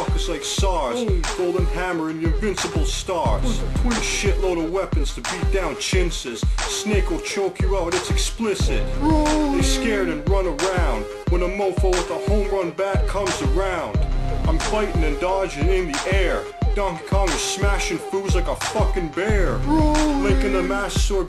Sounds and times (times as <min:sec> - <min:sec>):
Music: 0:00.0 - 0:21.2
Speech: 0:00.0 - 0:21.2.